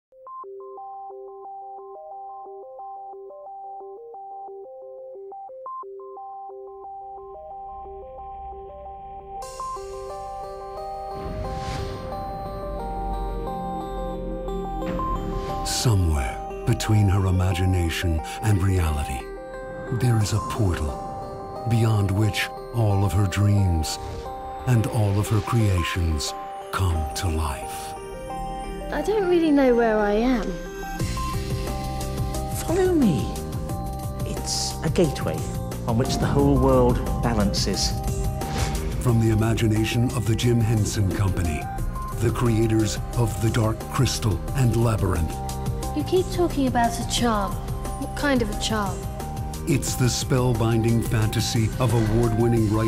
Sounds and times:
Sidetone: 0:00.1 - 0:52.8.

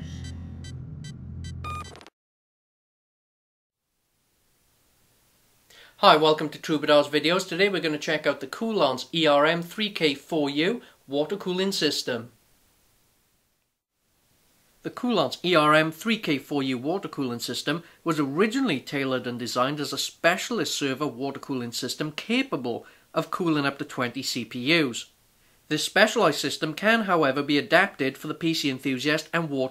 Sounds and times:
Speech: 0:06.0 - 0:12.4, 0:14.9 - 0:25.1, 0:25.7 - 0:29.7.

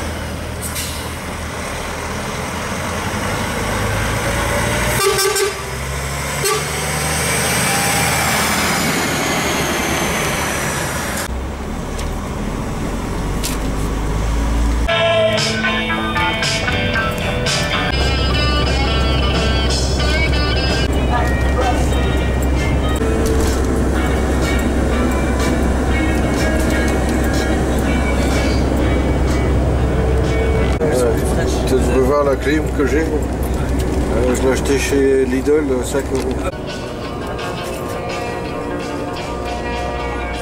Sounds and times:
Truck: 0:00.0 - 0:40.4
Vehicle horn, car horn, honking: 0:04.9 - 0:05.7, 0:06.4 - 0:06.8.

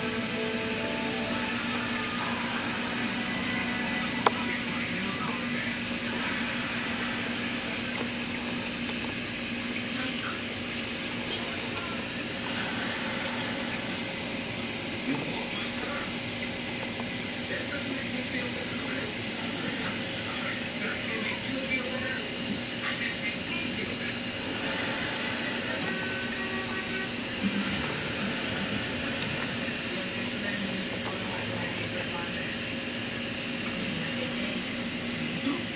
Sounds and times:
Water: 0:00.0 - 0:35.7.

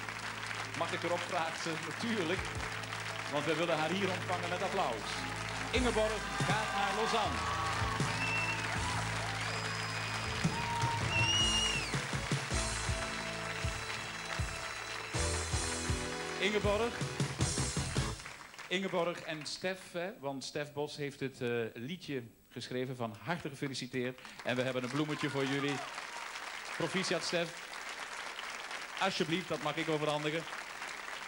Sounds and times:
Music: 0:00.0 - 0:18.4
Speech: 0:00.8 - 0:02.5, 0:03.3 - 0:07.4, 0:16.4 - 0:17.0, 0:18.7 - 0:25.9, 0:26.8 - 0:27.6, 0:29.0 - 0:30.5.

